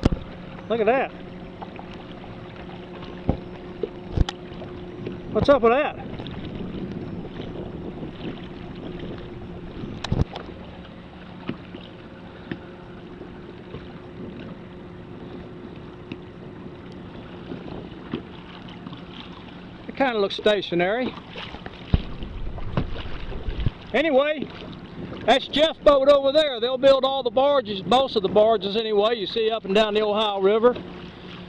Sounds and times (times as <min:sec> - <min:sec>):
Rowboat, canoe, kayak: 0:00.0 - 0:31.4.